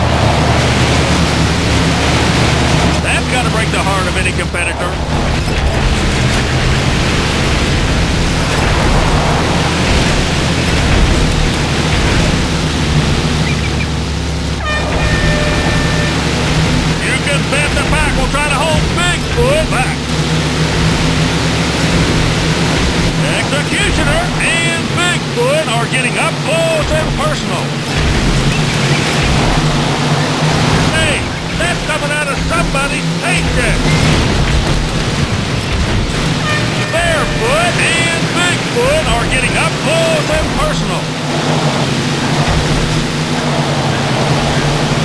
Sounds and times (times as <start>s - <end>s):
Vehicle: 0.0s - 45.0s
Speech: 3.0s - 5.0s, 17.0s - 20.1s, 23.2s - 27.8s, 30.9s - 33.9s, 36.8s - 41.1s.